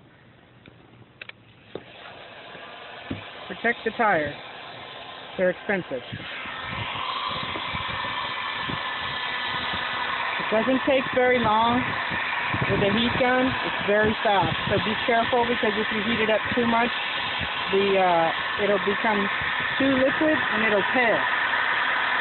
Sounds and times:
Speech: 3.5s - 4.4s, 5.4s - 6.0s, 10.4s - 11.8s, 12.7s - 16.9s, 17.7s - 21.2s.

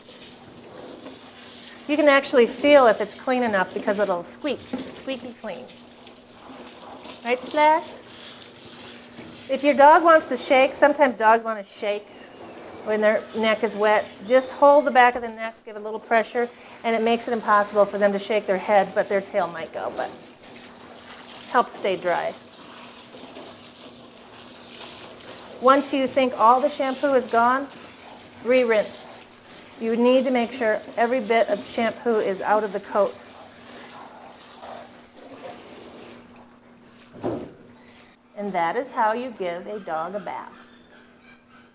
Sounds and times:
Speech: 1.9s - 5.8s, 7.2s - 8.0s, 9.5s - 12.1s, 12.9s - 20.2s, 21.5s - 22.4s, 25.6s - 27.8s, 28.4s - 29.0s, 29.8s - 33.2s, 38.4s - 40.6s.

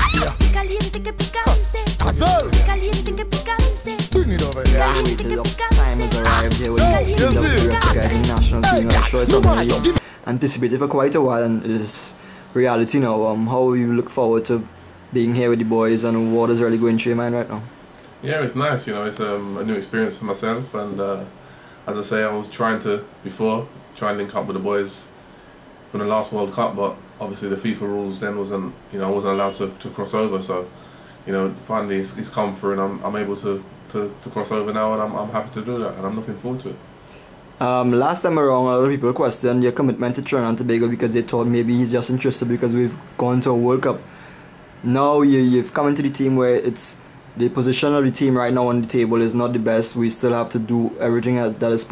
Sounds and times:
Speech: 2.0s - 2.6s, 4.2s - 25.1s, 25.9s - 30.7s, 31.3s - 36.8s, 37.6s - 44.1s, 44.8s - 51.9s.

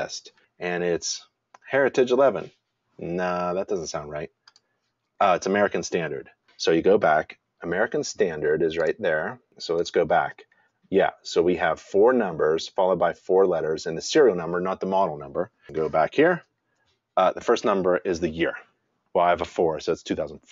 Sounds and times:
Speech: 0.0s - 4.3s, 5.2s - 16.5s, 17.2s - 20.5s.

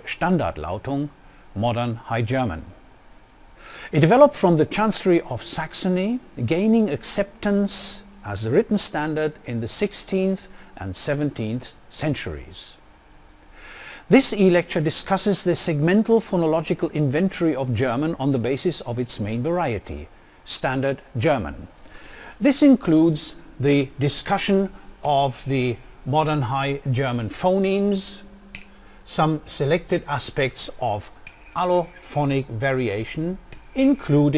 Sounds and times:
Speech: 0.0s - 2.8s, 3.9s - 12.8s, 14.1s - 21.8s, 22.4s - 28.3s, 29.1s - 34.3s.

